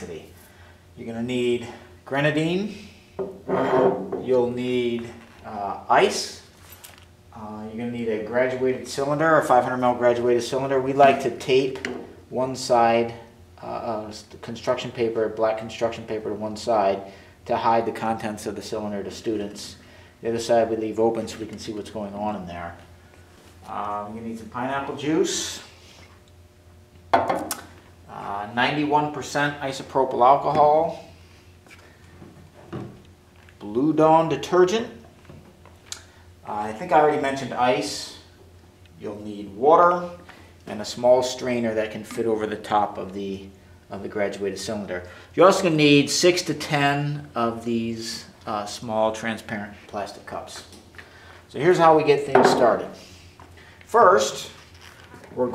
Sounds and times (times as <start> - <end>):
Speech: 0.0 - 0.4, 1.0 - 2.9, 3.6 - 6.5, 7.3 - 22.9, 23.6 - 25.7, 28.1 - 31.1, 33.6 - 35.0, 36.4 - 38.3, 39.0 - 50.8, 51.5 - 53.0, 53.9 - 55.5.